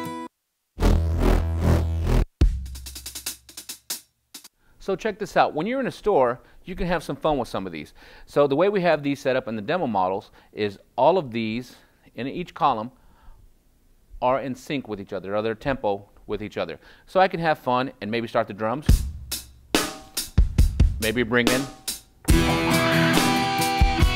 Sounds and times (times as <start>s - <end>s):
Sampler: 0.8s - 2.3s
Speech: 4.8s - 13.0s, 14.2s - 19.0s, 21.0s - 21.7s.